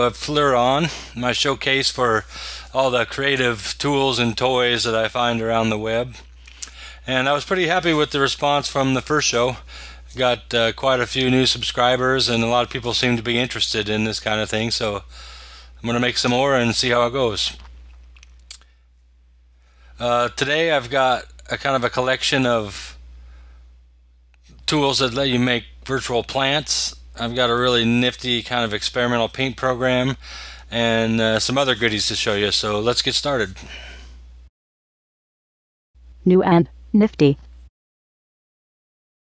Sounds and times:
Speech: 0:00.0 - 0:06.2, 0:07.1 - 0:15.1, 0:15.8 - 0:17.6, 0:20.0 - 0:23.0, 0:24.5 - 0:33.7, 0:36.3 - 0:37.4.

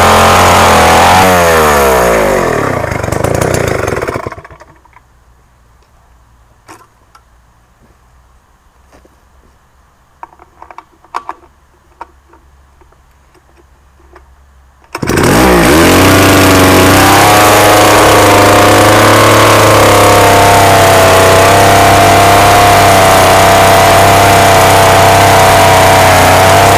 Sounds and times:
Chainsaw: 0:00.0 - 0:04.8, 0:14.9 - 0:26.7.

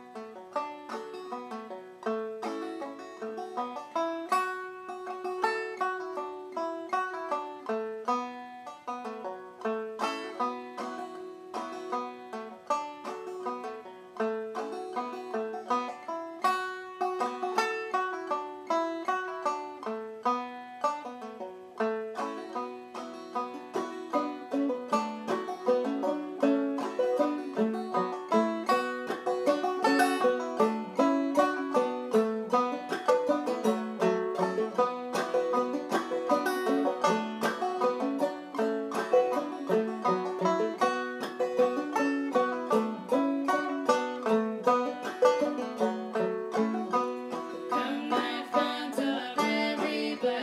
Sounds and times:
Banjo: 0:00.0 - 0:50.4.

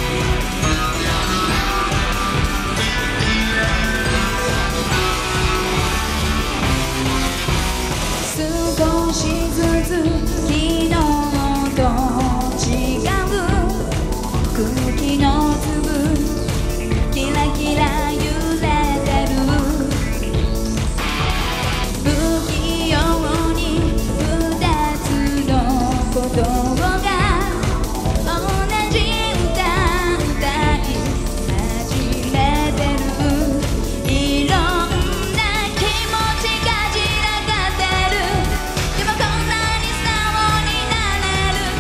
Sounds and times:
Music: 0:00.0 - 0:41.8.

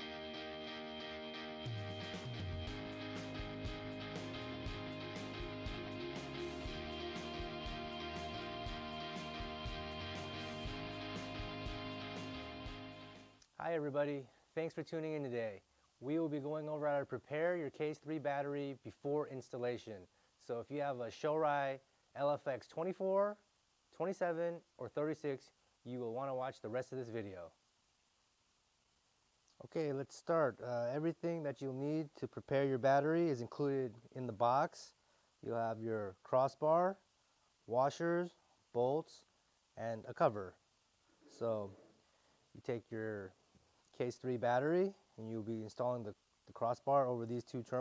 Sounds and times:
Speech: 0:13.6 - 0:27.6, 0:29.5 - 0:37.0, 0:37.7 - 0:40.6, 0:41.3 - 0:41.9, 0:42.6 - 0:47.8.

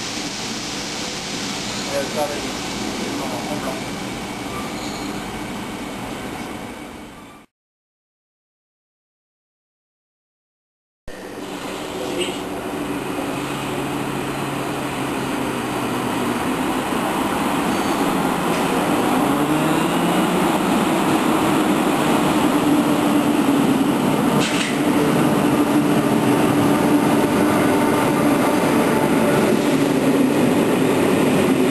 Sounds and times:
Speech: 0:01.9 - 0:03.9.

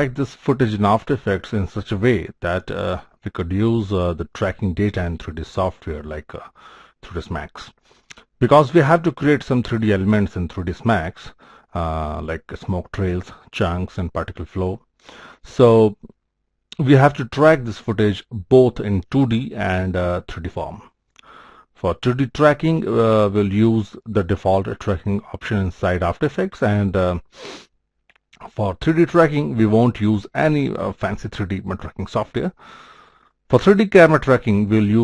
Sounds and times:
Speech: 0:00.0 - 0:07.8, 0:08.4 - 0:14.8, 0:15.4 - 0:16.2, 0:16.8 - 0:20.9, 0:21.8 - 0:27.3, 0:28.4 - 0:32.6, 0:33.5 - 0:35.0.

